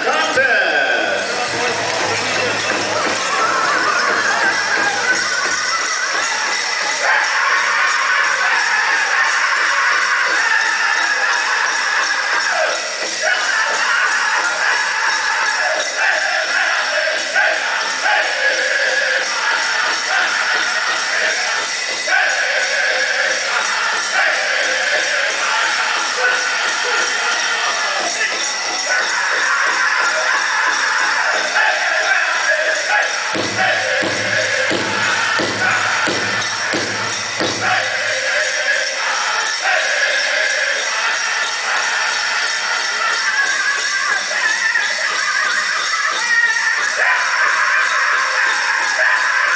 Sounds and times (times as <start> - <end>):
Music: 0.0 - 49.5.